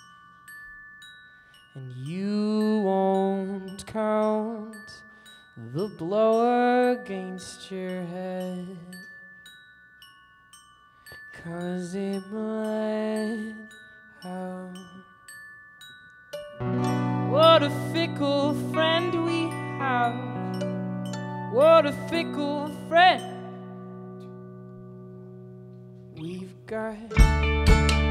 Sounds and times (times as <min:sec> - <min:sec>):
Glockenspiel: 0:00.0 - 0:28.1
Guitar: 0:16.5 - 0:28.1.